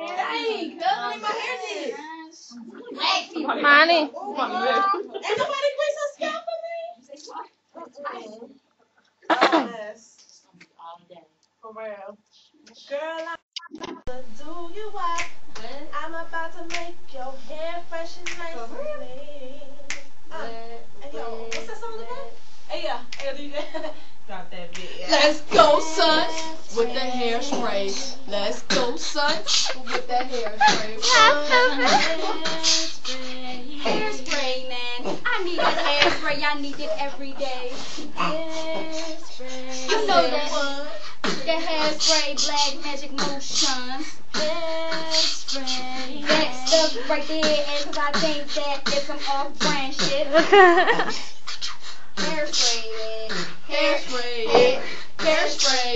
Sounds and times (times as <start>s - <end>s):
Speech: 0.0s - 8.6s, 30.6s - 32.4s, 39.7s - 40.8s, 52.2s - 55.9s.